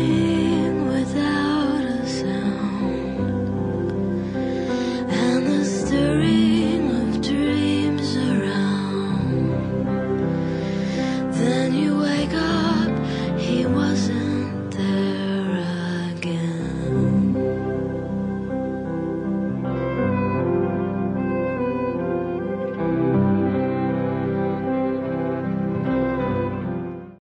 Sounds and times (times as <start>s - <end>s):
Music: 0.0s - 27.2s.